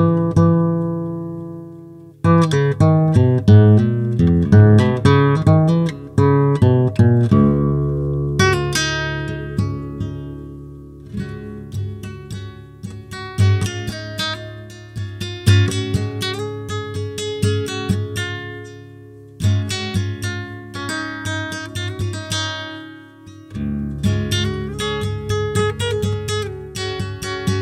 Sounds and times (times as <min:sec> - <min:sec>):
Music: 0:00.0 - 0:27.6.